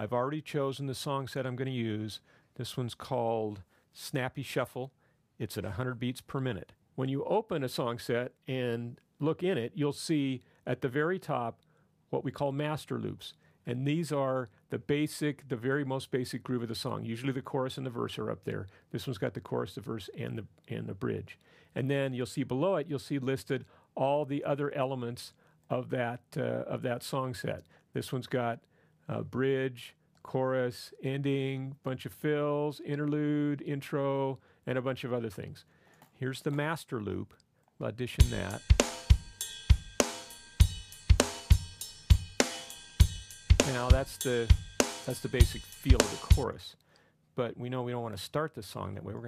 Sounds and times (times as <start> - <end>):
Speech: 0.0 - 38.7, 43.6 - 46.8, 47.4 - 49.2.